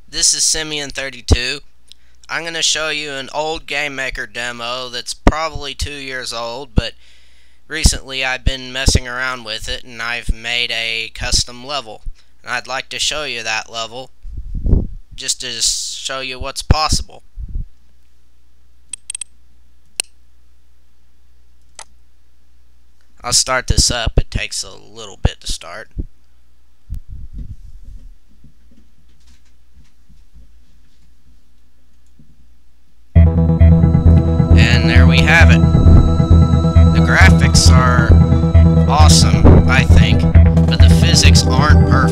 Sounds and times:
Speech: 0.1s - 1.7s, 2.3s - 7.0s, 7.7s - 14.1s, 15.2s - 17.2s, 23.2s - 26.0s, 34.6s - 35.6s, 36.9s - 38.1s, 38.9s - 42.1s
Music: 33.2s - 42.1s.

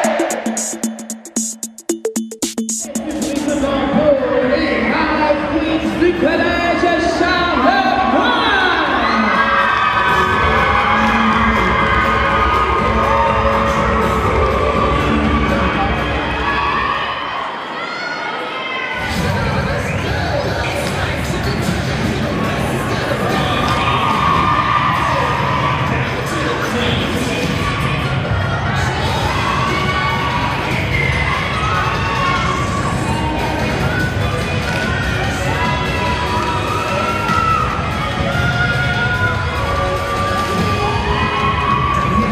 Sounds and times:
Music: 0.0s - 17.2s, 19.0s - 42.3s
Inside, large room or hall: 0.0s - 42.3s
Cheering: 6.2s - 42.3s.

